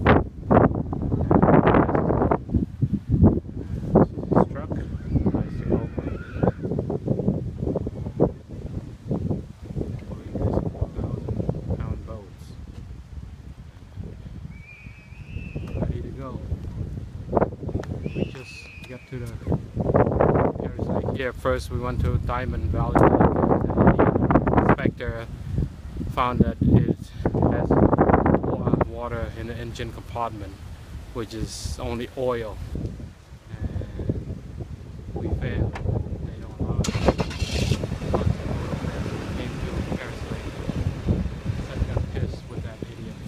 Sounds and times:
Speech: 4.2 - 6.4, 10.0 - 12.6, 15.8 - 16.5, 18.3 - 19.6, 20.6 - 25.3, 26.1 - 27.8, 28.4 - 30.6, 31.2 - 32.6, 33.5 - 34.2, 35.2 - 36.9, 38.1 - 40.8, 41.6 - 43.2.

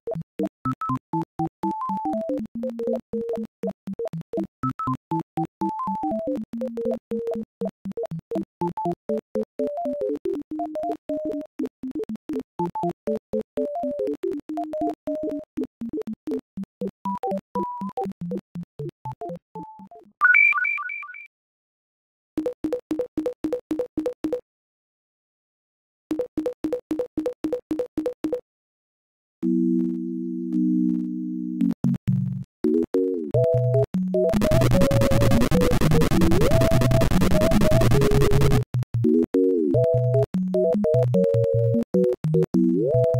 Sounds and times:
Music: 0.0 - 20.2, 22.4 - 24.4, 26.1 - 28.4, 29.4 - 43.1.

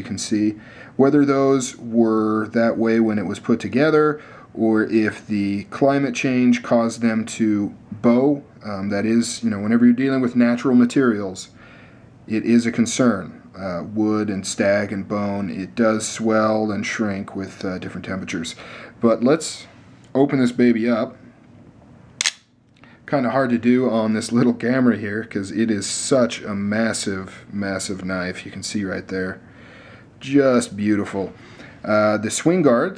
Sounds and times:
Speech: 0.0 - 11.6, 12.3 - 21.2, 23.1 - 29.4, 30.2 - 32.9
Inside, small room: 0.0 - 32.9.

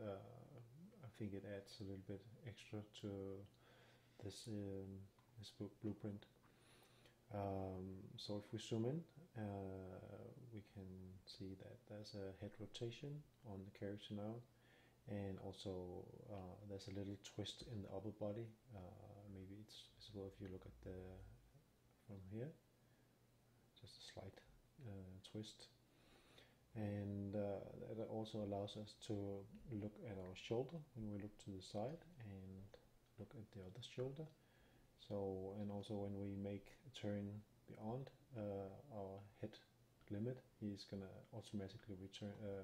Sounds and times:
Speech: 0.0 - 3.6, 4.2 - 6.4, 7.3 - 22.6, 23.8 - 25.8, 26.7 - 34.4, 35.0 - 42.6.

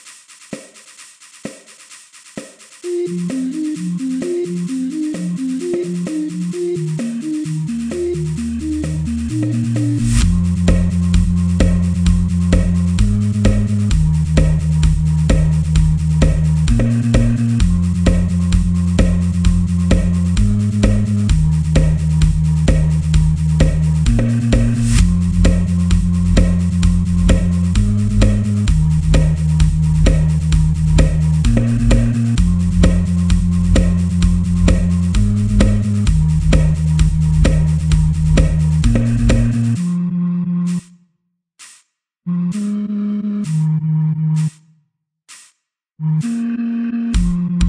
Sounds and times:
Techno: 0.0 - 40.9, 46.1 - 47.6.

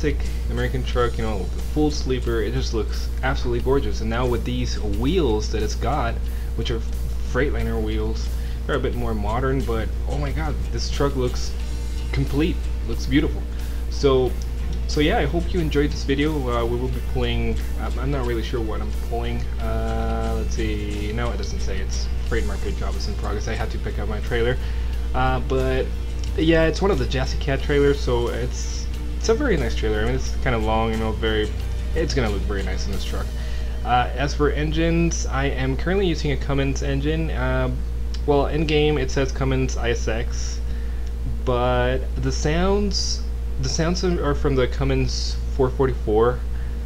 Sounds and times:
Speech: 0.0 - 40.6, 41.3 - 46.5
Music: 0.0 - 46.8.

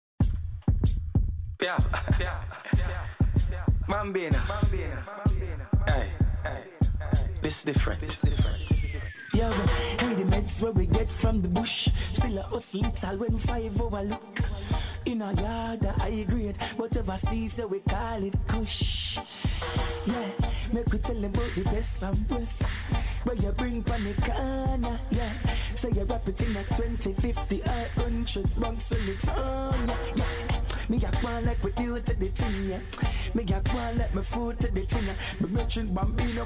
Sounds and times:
Reggae: 1.6 - 36.4.

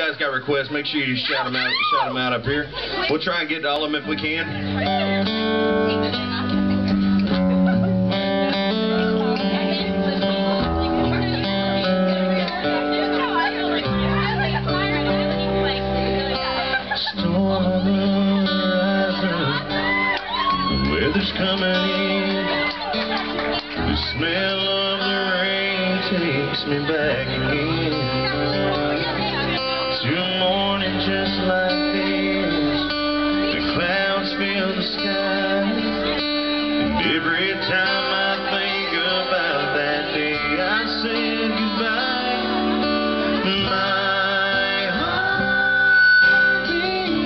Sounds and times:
Music: 4.0 - 47.2
Male singing: 16.9 - 19.9, 20.6 - 22.9, 23.8 - 29.2, 29.9 - 36.2, 36.8 - 47.2.

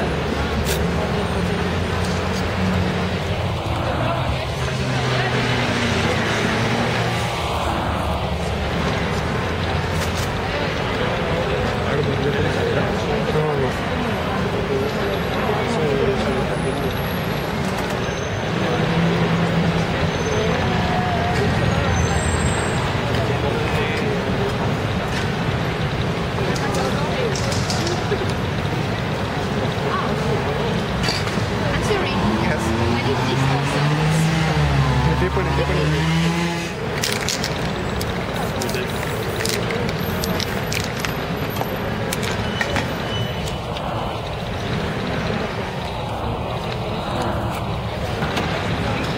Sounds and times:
Speech: 0.0 - 7.2, 9.4 - 36.2.

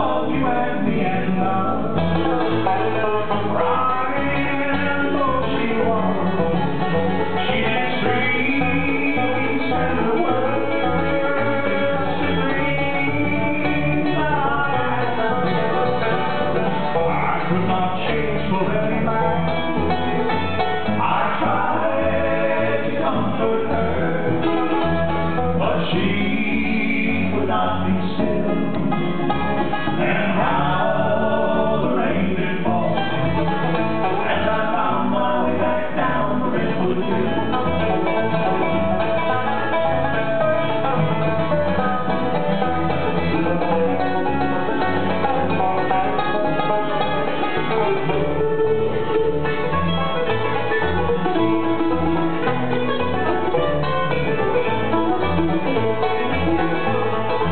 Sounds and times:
Banjo: 0.0 - 57.5
Bluegrass: 0.0 - 57.5.

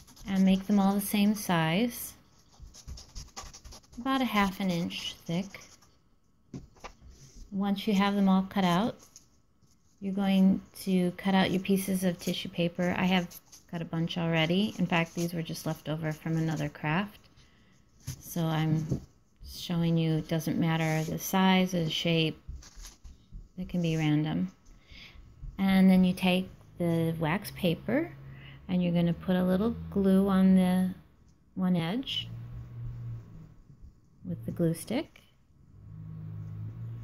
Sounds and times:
Speech: 0.2 - 2.2, 4.0 - 5.6, 7.5 - 9.0, 10.0 - 17.2, 18.2 - 22.4, 23.6 - 24.6, 25.6 - 31.0, 31.6 - 32.4, 34.2 - 35.2.

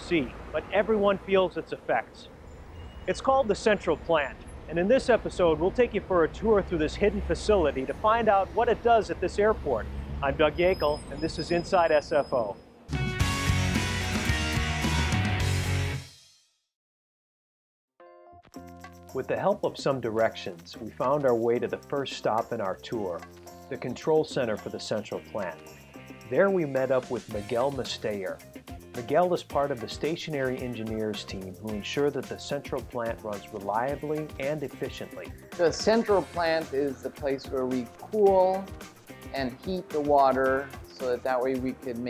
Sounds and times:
Speech: 0.0 - 2.3, 3.1 - 12.6, 19.2 - 25.6, 26.3 - 28.4, 29.0 - 38.7, 39.3 - 42.0
Music: 4.7 - 9.5, 12.9 - 16.7, 18.0 - 42.0.

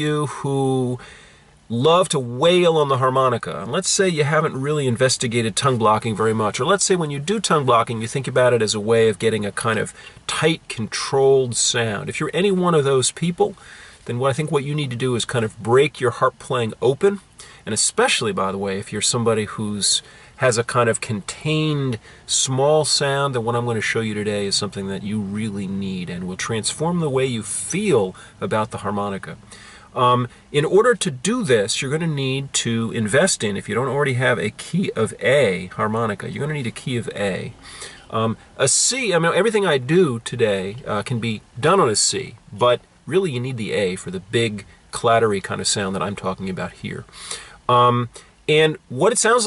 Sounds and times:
Speech: 0.0 - 1.0, 1.7 - 29.4, 30.0 - 47.1, 47.7 - 49.4.

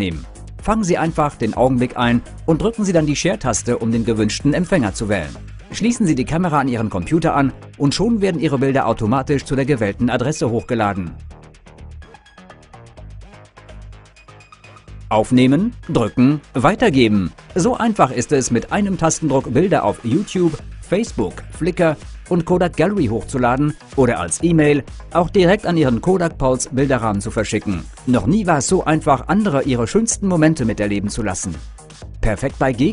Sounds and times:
Speech: 0.0 - 11.2, 15.1 - 31.6, 32.2 - 32.9
Music: 0.0 - 32.9.

